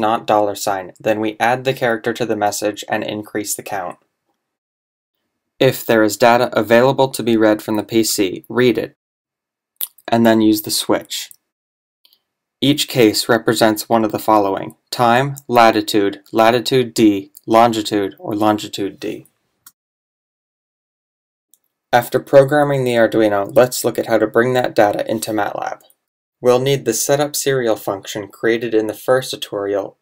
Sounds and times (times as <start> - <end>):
Speech: 0.0 - 4.0, 5.6 - 9.0, 9.8 - 11.4, 12.6 - 19.3, 22.0 - 30.0.